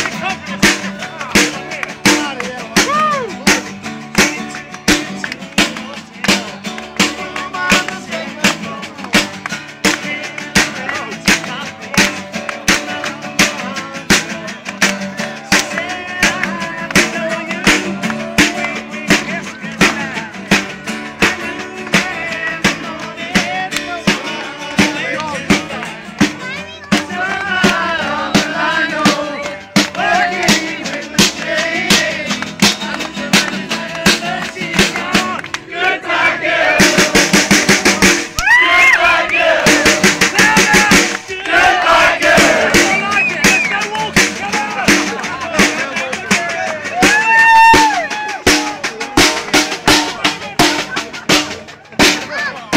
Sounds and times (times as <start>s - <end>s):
Music: 0.0s - 52.7s.